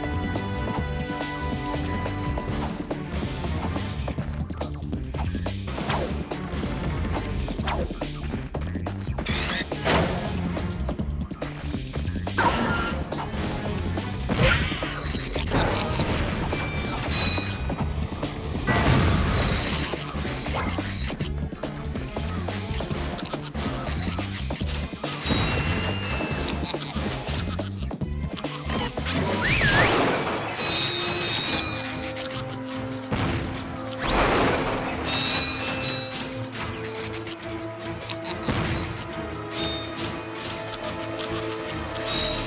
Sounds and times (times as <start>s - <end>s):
Music: 0.0s - 42.4s.